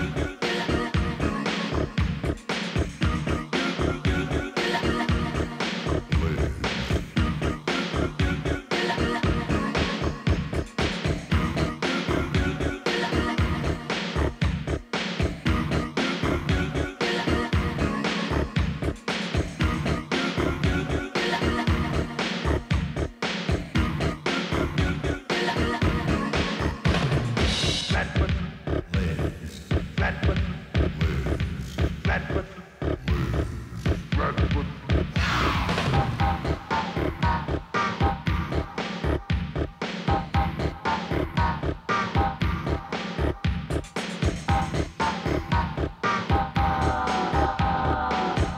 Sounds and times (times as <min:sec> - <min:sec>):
Music: 0:00.0 - 0:48.5.